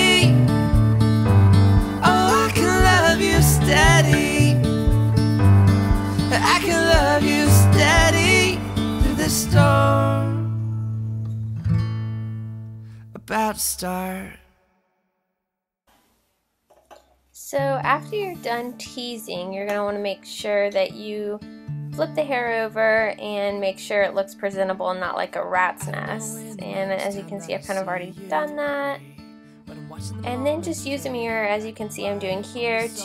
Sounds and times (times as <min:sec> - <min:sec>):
Music: 0:00.0 - 0:13.4, 0:17.6 - 0:33.0
Speech: 0:13.2 - 0:14.4, 0:17.4 - 0:21.4, 0:22.0 - 0:29.0, 0:29.8 - 0:33.0.